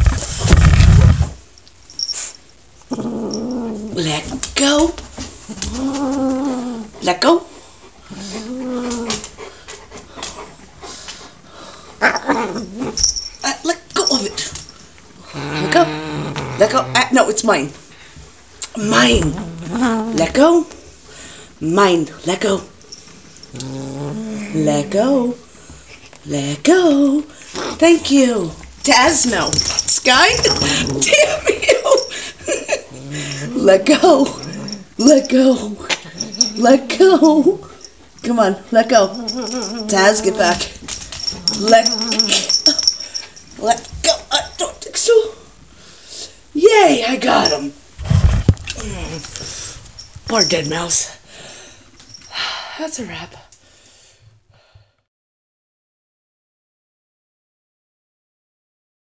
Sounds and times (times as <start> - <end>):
Speech: 3.9 - 5.0, 7.0 - 7.5, 13.4 - 14.5, 16.6 - 17.8, 18.7 - 20.8, 21.6 - 22.7, 24.4 - 25.4, 26.3 - 31.9, 33.4 - 34.4, 39.9 - 40.7, 43.6 - 45.4, 46.6 - 47.8, 50.3 - 51.2, 52.8 - 53.5.